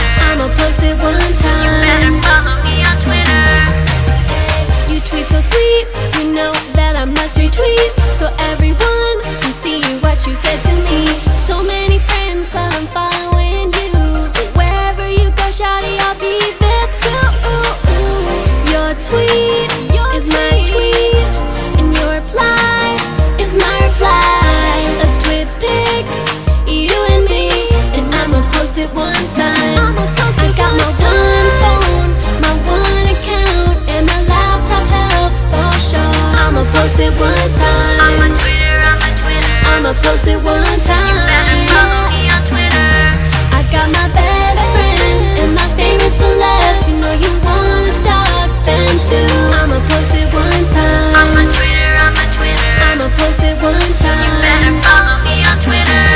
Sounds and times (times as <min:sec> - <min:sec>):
Pop music: 0:00.0 - 0:56.1.